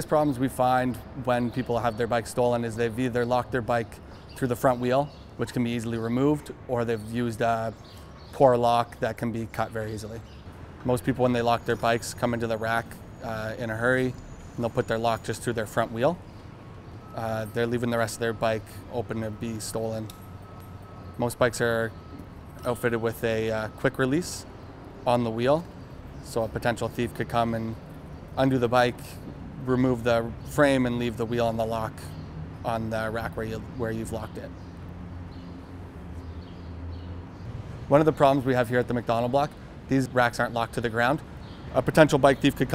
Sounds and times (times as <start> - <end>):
Speech: 0.0 - 16.2, 17.1 - 20.1, 21.2 - 22.0, 22.6 - 27.8, 28.4 - 34.5, 37.9 - 42.7.